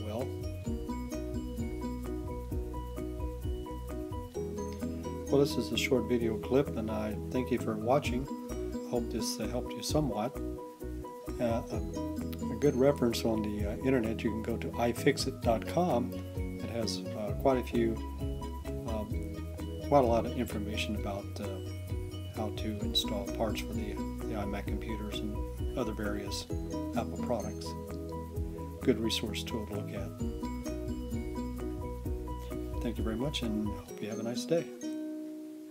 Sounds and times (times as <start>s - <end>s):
Music: 0.0s - 35.7s
Speech: 5.3s - 8.3s, 8.9s - 10.4s, 11.4s - 11.8s, 12.4s - 18.0s, 18.9s - 19.2s, 19.9s - 21.6s, 22.4s - 27.8s, 28.8s - 30.1s, 32.8s - 34.8s.